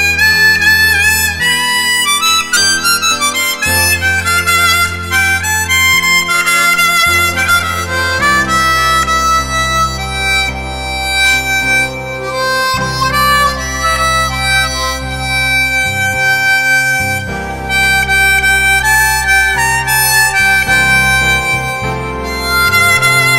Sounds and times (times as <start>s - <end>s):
Harmonica: 0.0s - 23.3s
Wind instrument, woodwind instrument: 0.0s - 23.3s.